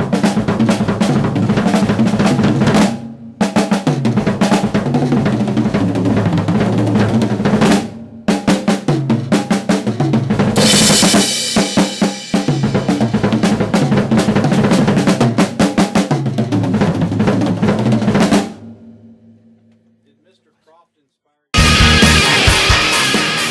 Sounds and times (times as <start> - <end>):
Bass drum: 0.0 - 19.1, 21.6 - 23.5
Drum roll: 0.0 - 20.1, 21.6 - 23.5
Drum kit: 0.0 - 20.4, 21.6 - 23.5.